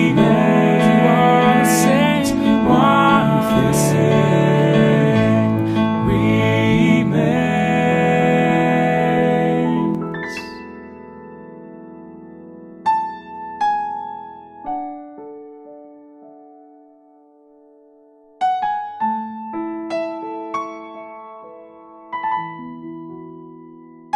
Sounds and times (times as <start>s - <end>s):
Singing: 0.0s - 10.6s
Electric piano: 0.0s - 24.1s.